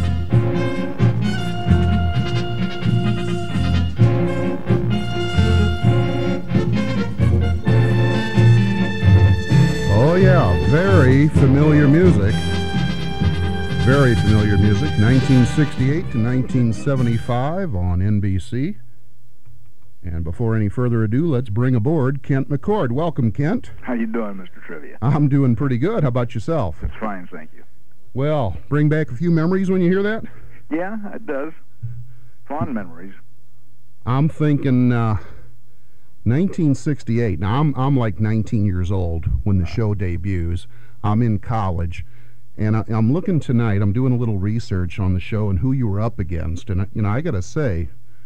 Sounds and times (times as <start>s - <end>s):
Music: 0.0s - 17.8s
Speech: 9.9s - 12.4s, 13.8s - 18.8s, 20.0s - 31.6s, 32.5s - 33.2s, 34.0s - 35.4s, 36.2s - 48.0s.